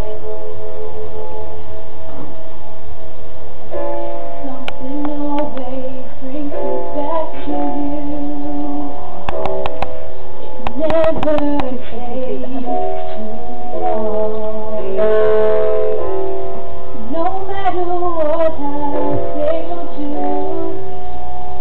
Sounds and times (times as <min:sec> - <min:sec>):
Music: 0:00.0 - 0:21.6
Female singing: 0:04.5 - 0:08.9, 0:10.8 - 0:12.9, 0:17.1 - 0:21.0.